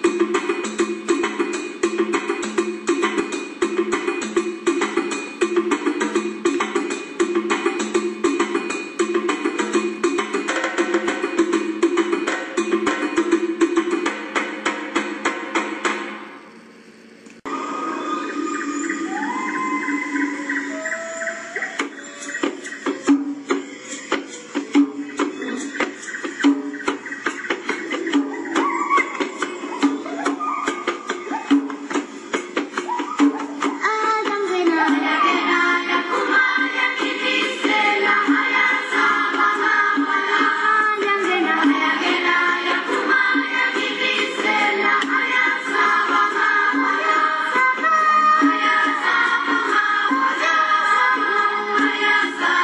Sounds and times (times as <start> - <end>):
Music of Africa: 0.0 - 16.2, 17.4 - 52.6.